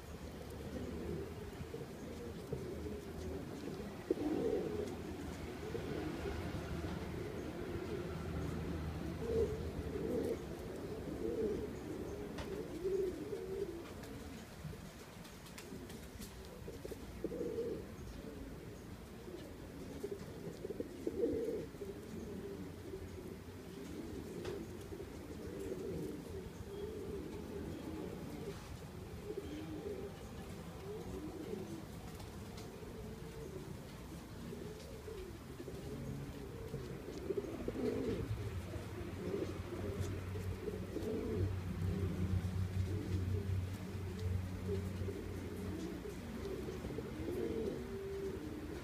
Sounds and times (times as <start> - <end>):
Pigeon, dove: 0.0 - 48.8.